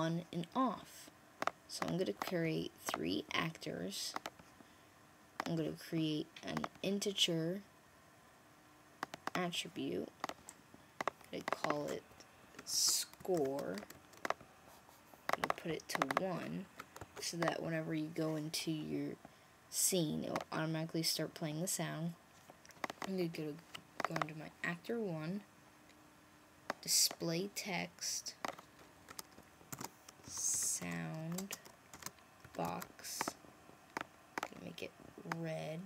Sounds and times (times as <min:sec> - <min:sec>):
Speech: 0:00.0 - 0:01.1, 0:01.7 - 0:04.2, 0:05.4 - 0:07.7, 0:09.4 - 0:10.1, 0:11.3 - 0:13.9, 0:15.4 - 0:22.2, 0:23.0 - 0:25.5, 0:26.8 - 0:28.4, 0:30.3 - 0:31.6, 0:32.6 - 0:33.4, 0:34.5 - 0:35.8.